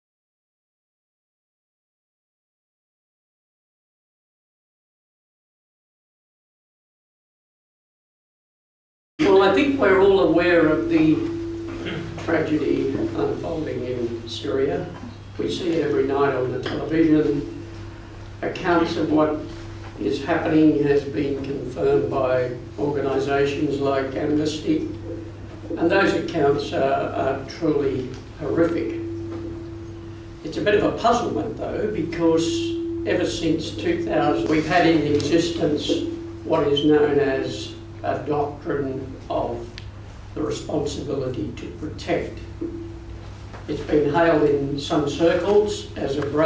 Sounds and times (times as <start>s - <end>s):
Speech: 9.2s - 11.3s, 11.9s - 17.5s, 18.4s - 25.0s, 25.7s - 29.0s, 30.4s - 39.8s, 40.4s - 42.5s, 43.7s - 46.4s.